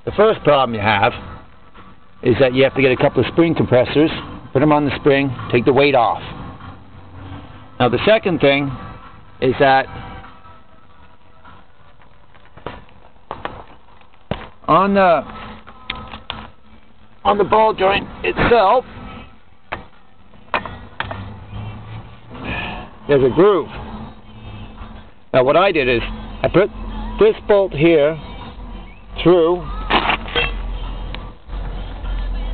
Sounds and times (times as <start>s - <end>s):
Music: 0.0s - 13.0s, 14.8s - 32.5s.